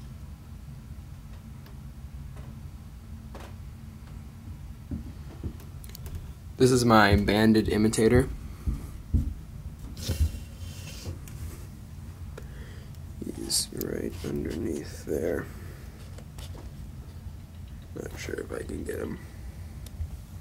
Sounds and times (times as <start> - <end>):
Speech: 6.6 - 8.3, 13.2 - 15.6, 18.0 - 19.3.